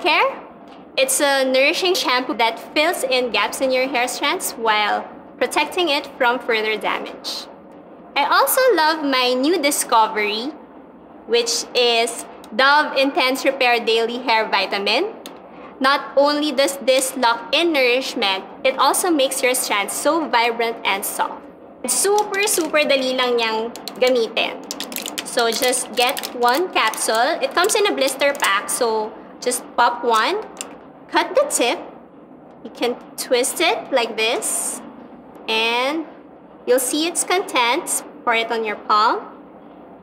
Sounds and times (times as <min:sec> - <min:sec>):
Speech: 0:00.0 - 0:00.4, 0:01.0 - 0:07.5, 0:08.2 - 0:10.6, 0:11.3 - 0:15.2, 0:15.8 - 0:24.7, 0:25.3 - 0:30.5, 0:31.1 - 0:31.9, 0:32.7 - 0:34.9, 0:35.5 - 0:39.4.